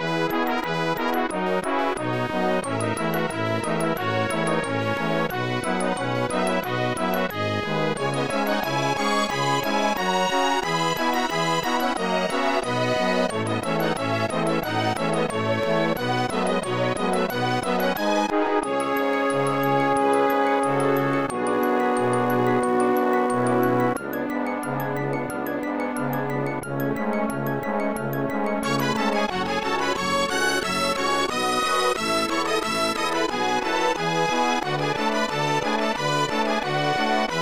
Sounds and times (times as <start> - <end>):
Video game music: 0.0 - 37.4.